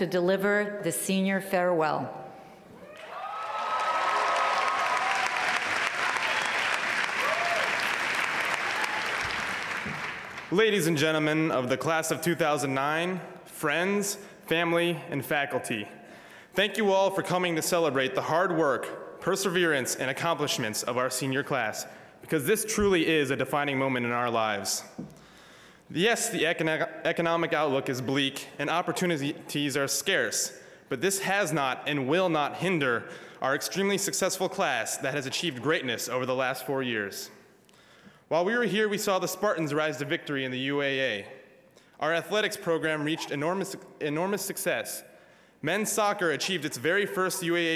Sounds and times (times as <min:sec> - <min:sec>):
Narration, monologue: 0:00.0 - 0:02.8, 0:10.4 - 0:47.7
Male speech, man speaking: 0:10.5 - 0:15.9, 0:16.6 - 0:24.9, 0:25.9 - 0:37.4, 0:38.3 - 0:41.4, 0:42.0 - 0:47.7.